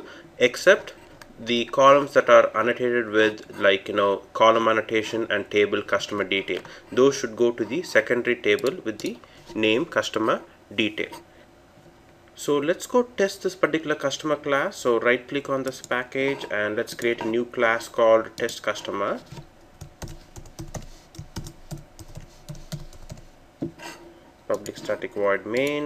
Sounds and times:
Computer keyboard: 19.8s - 23.3s.

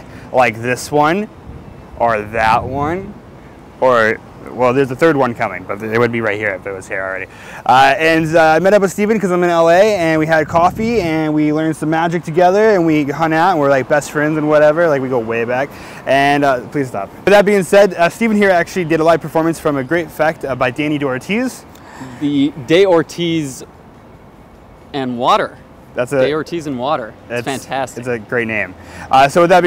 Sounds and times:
Speech: 2.0s - 3.2s, 3.8s - 21.6s, 24.9s - 29.6s.

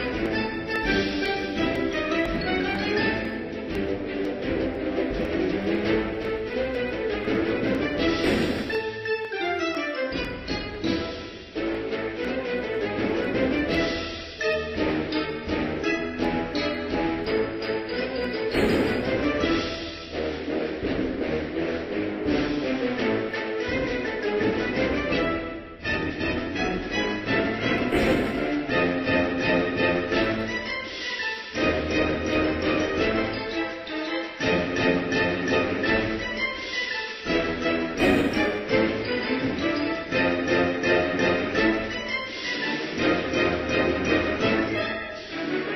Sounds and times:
Music: 0.0s - 45.7s.

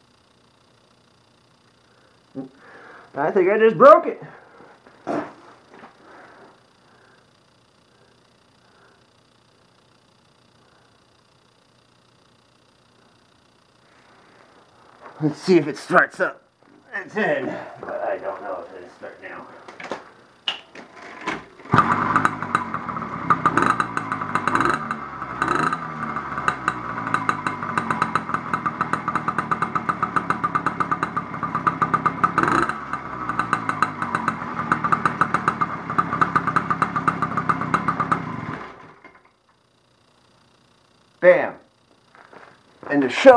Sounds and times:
Engine: 0.0s - 3.1s, 21.1s - 41.2s
Bicycle: 20.8s - 39.7s
Motorcycle: 21.2s - 39.4s.

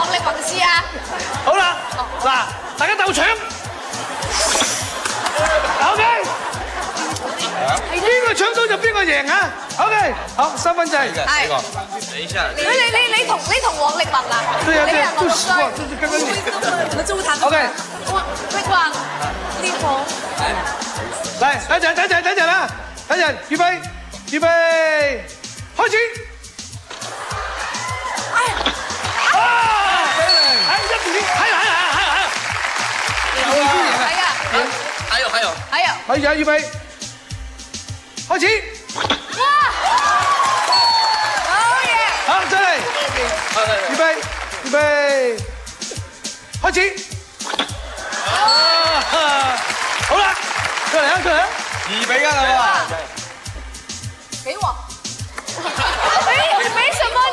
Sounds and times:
Music: 0.0s - 57.3s.

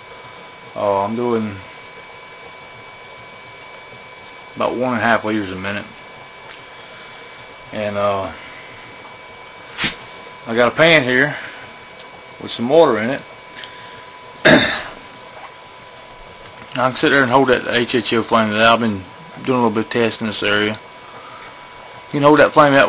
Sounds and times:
Speech: 0.8s - 1.7s, 4.6s - 6.0s, 7.7s - 8.4s, 10.5s - 11.4s, 12.4s - 13.3s, 16.7s - 20.8s, 22.1s - 22.8s.

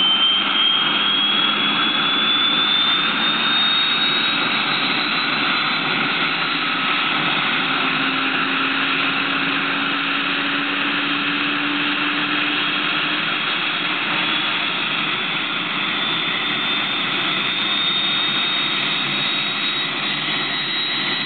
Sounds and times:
Helicopter: 0.0s - 21.2s.

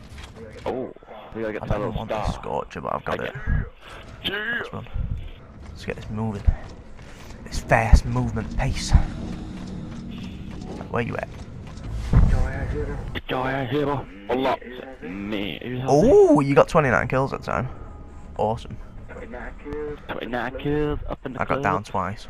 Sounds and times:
Speech: 0.4s - 3.7s, 7.5s - 9.1s, 12.3s - 17.7s, 18.4s - 22.3s.

